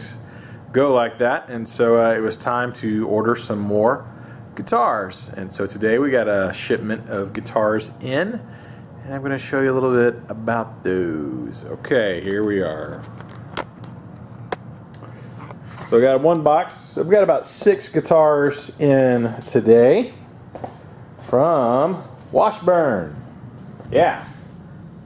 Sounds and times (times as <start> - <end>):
Speech: 0.0 - 13.0, 15.9 - 20.2, 21.3 - 23.2, 23.9 - 24.5.